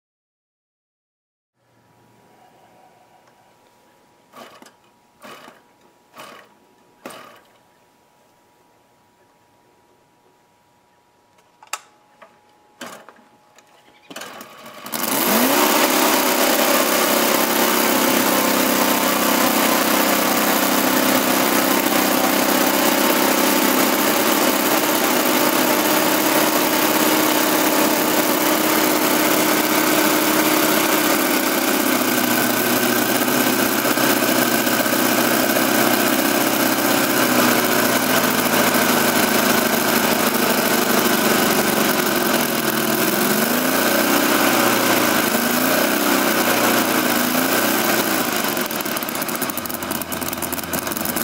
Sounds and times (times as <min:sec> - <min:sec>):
Idling: 0:14.2 - 0:51.2.